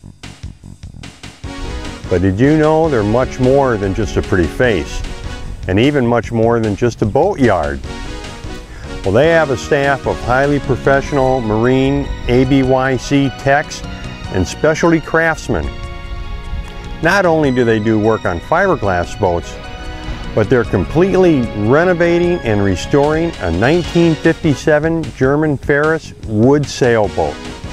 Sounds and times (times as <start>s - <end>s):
Music: 0.0s - 27.7s
Speech: 2.1s - 5.0s, 5.7s - 7.8s, 9.0s - 15.7s, 17.0s - 19.6s, 20.4s - 27.4s.